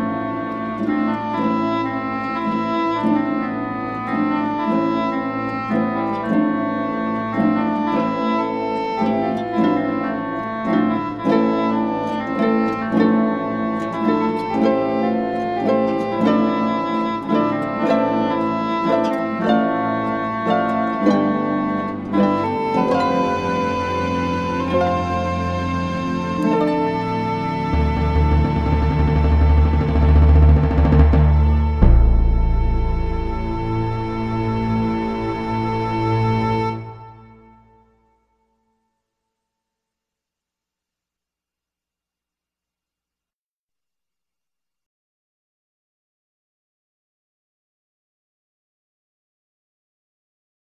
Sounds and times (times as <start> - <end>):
Pizzicato: 0.0 - 37.8
Harp: 0.0 - 38.0.